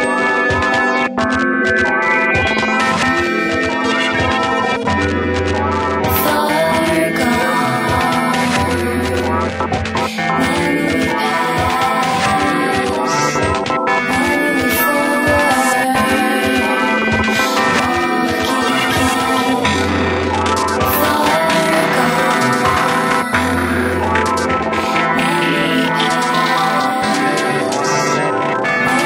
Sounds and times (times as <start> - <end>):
Music: 0.0 - 29.0.